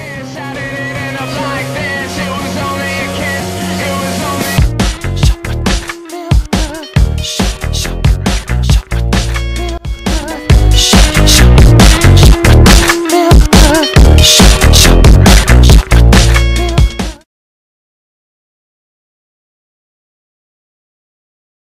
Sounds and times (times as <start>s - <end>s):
Music: 0.0s - 17.3s.